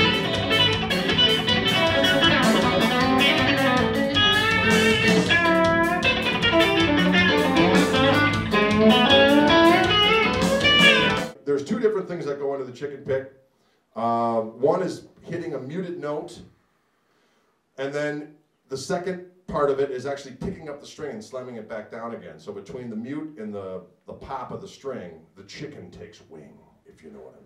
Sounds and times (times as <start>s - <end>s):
Speech: 11.3s - 13.4s, 14.0s - 16.5s, 17.8s - 27.4s.